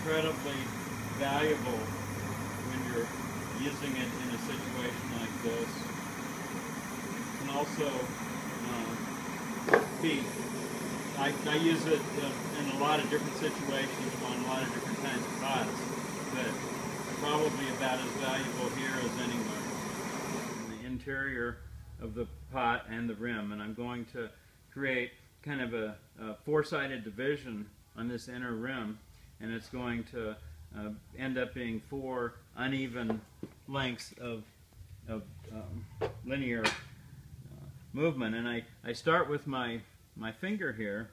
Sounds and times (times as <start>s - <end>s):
Speech: 0.0s - 1.9s, 2.7s - 5.8s, 7.4s - 9.0s, 10.0s - 10.4s, 11.2s - 16.6s, 17.2s - 19.7s, 20.7s - 34.5s, 35.1s - 36.8s, 37.5s - 41.1s.